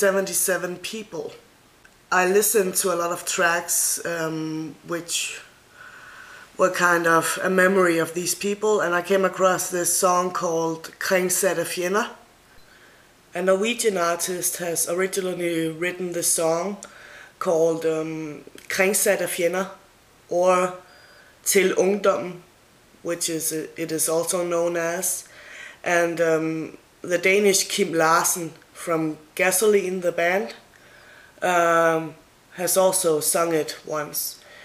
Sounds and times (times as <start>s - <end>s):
Speech: 0.0s - 1.4s, 2.1s - 5.5s, 6.6s - 12.2s, 13.3s - 30.7s, 31.4s - 34.5s.